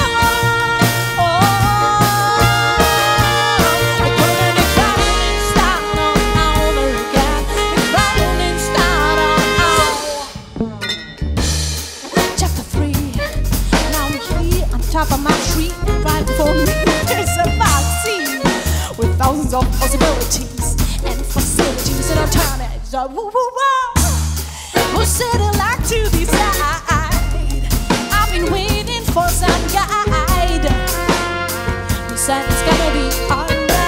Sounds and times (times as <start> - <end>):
Singing: 0.0 - 10.4.